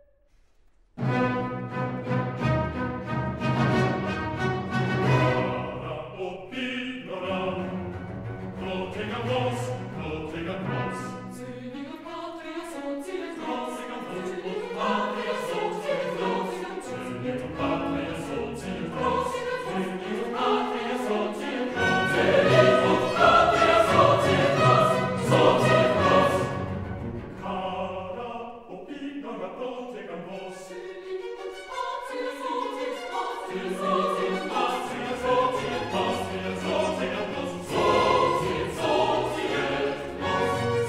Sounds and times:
Opera: 1.0 - 40.8.

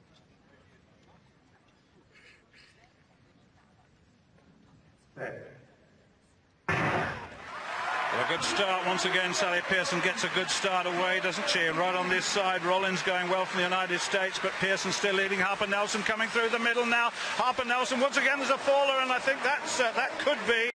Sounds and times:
Speech: 8.2 - 20.7.

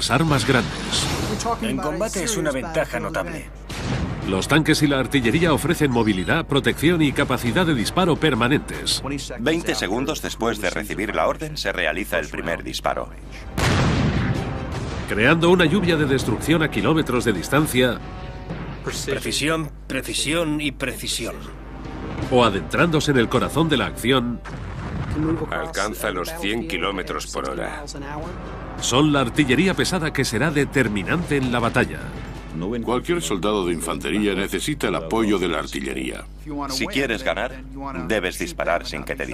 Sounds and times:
Speech: 0.0 - 3.5, 4.3 - 13.4, 15.1 - 18.0, 18.9 - 21.5, 25.2 - 28.3, 28.9 - 39.3
Music: 3.0 - 11.1, 12.3 - 20.3, 21.1 - 35.7.

